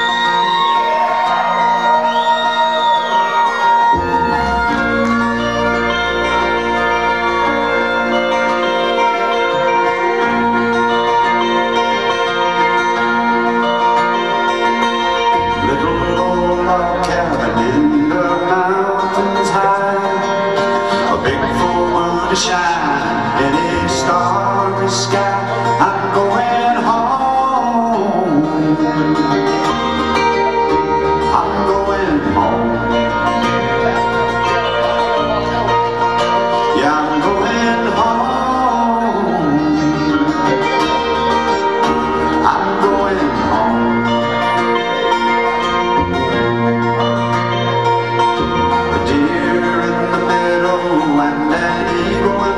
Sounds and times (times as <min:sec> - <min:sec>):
Music: 0:00.0 - 0:52.5.